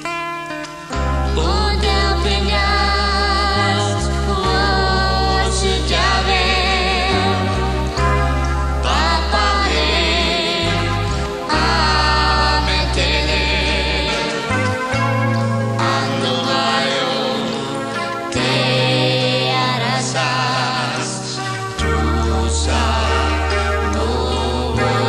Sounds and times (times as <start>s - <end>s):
Music: 0.0s - 25.0s
Female singing: 1.4s - 7.5s.